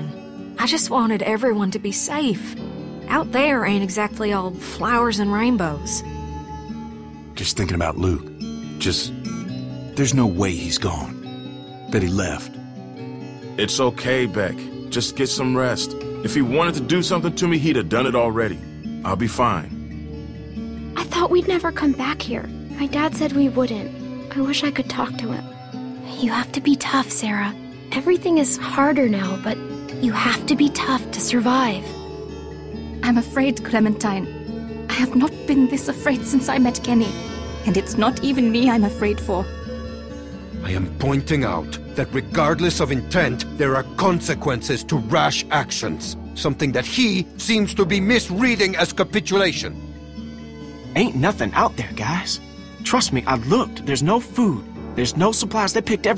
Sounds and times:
Music: 0:00.0 - 0:56.1
Speech: 0:00.6 - 0:02.5, 0:03.1 - 0:06.0, 0:07.4 - 0:09.4, 0:10.0 - 0:11.2, 0:11.9 - 0:12.5, 0:13.6 - 0:19.7, 0:21.0 - 0:25.4, 0:26.1 - 0:31.9, 0:34.9 - 0:37.1, 0:37.7 - 0:39.5, 0:40.6 - 0:49.7, 0:51.0 - 0:56.1.

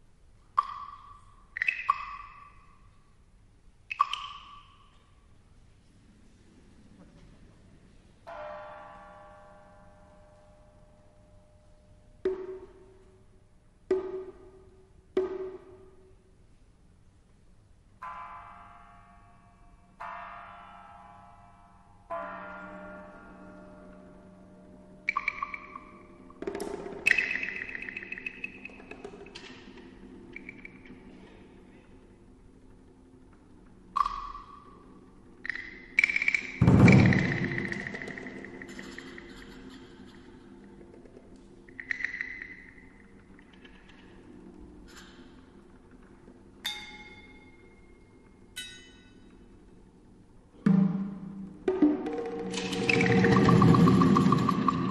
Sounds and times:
Music: 0:00.0 - 0:54.9.

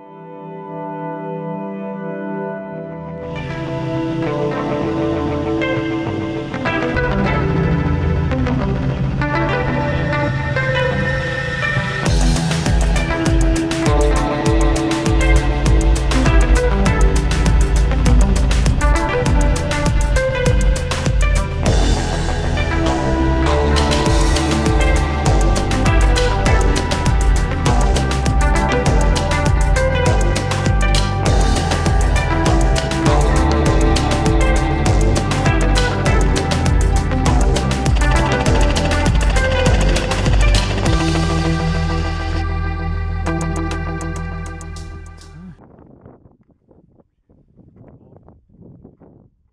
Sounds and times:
Music: 0:00.0 - 0:45.7.

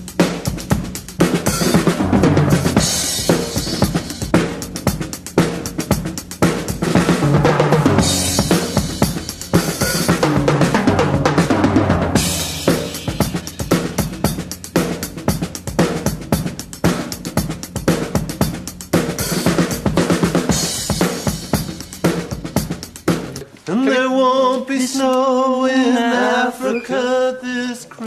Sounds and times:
Bass drum: 0:00.0 - 0:23.4
Rimshot: 0:00.0 - 0:23.4
Drum kit: 0:00.0 - 0:23.6.

